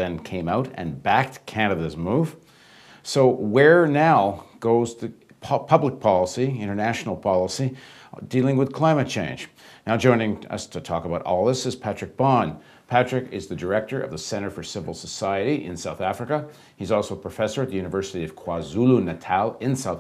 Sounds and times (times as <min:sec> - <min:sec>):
Speech: 0:00.0 - 0:02.4, 0:03.0 - 0:20.0.